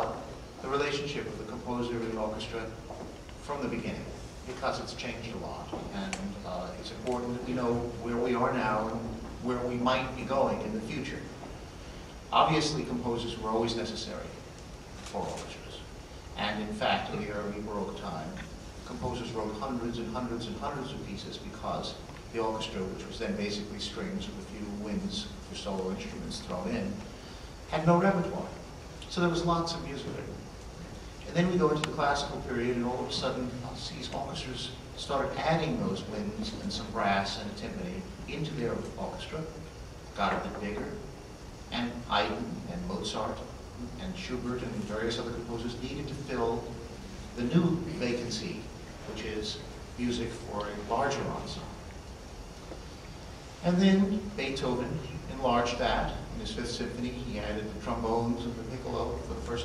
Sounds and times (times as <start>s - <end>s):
Male speech, man speaking: 0.0s - 2.8s, 3.4s - 11.4s, 12.3s - 14.4s, 15.0s - 27.0s, 27.7s - 30.4s, 31.2s - 39.6s, 40.2s - 41.1s, 41.7s - 46.8s, 47.4s - 51.8s, 53.6s - 59.6s
Narration, monologue: 0.0s - 59.6s.